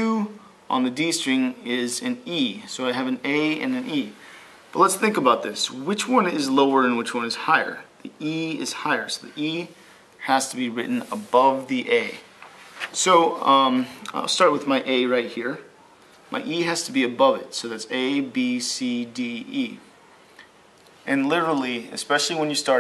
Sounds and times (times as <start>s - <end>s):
Speech: 0.0s - 12.3s, 13.0s - 15.7s, 16.3s - 19.9s, 21.0s - 22.8s.